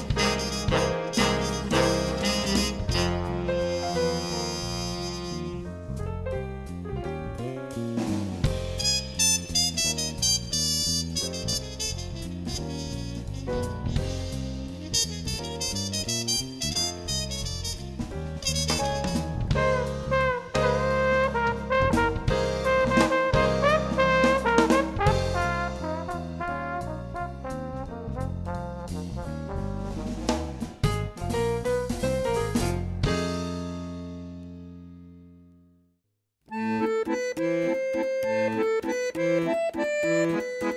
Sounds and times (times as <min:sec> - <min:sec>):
Music: 0:00.0 - 0:40.7.